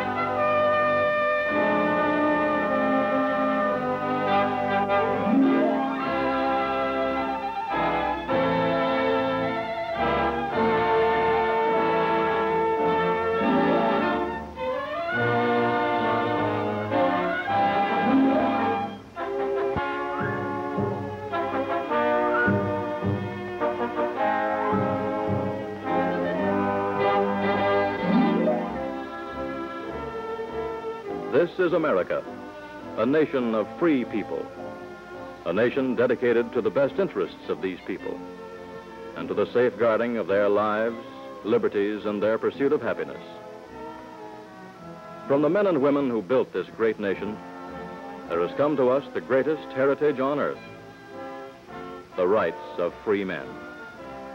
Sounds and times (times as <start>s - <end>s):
Music: 0.0s - 54.3s.